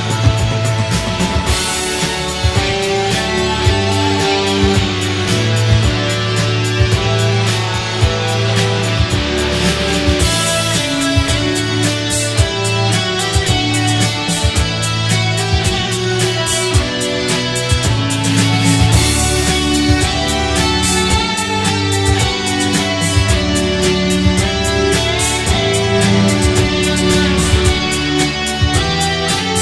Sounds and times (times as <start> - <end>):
Electric guitar: 0.0 - 29.6.